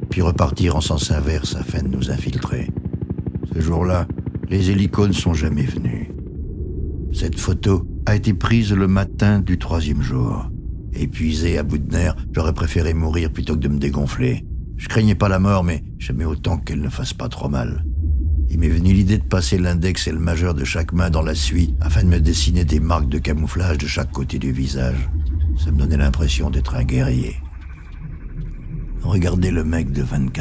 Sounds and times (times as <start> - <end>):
Speech: 0.0 - 2.8, 3.5 - 6.2, 7.2 - 17.8, 18.5 - 27.5, 29.0 - 30.4.